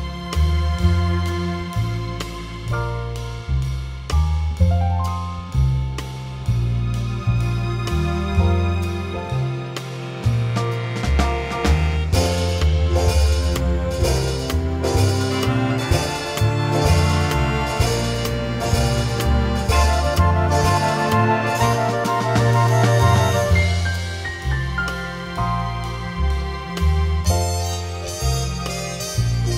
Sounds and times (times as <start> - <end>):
Music: 0.0 - 29.5.